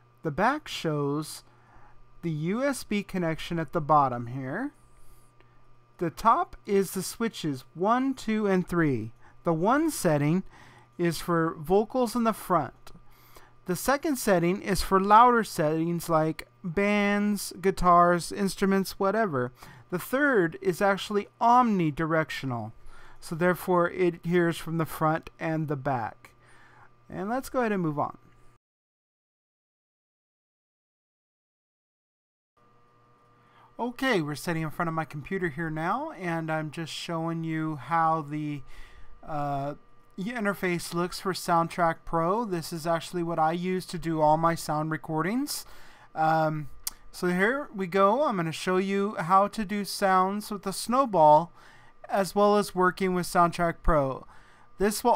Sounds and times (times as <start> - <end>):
Speech: 0.2 - 1.5, 2.2 - 4.8, 6.0 - 13.0, 13.7 - 26.3, 27.1 - 28.2, 33.8 - 55.1.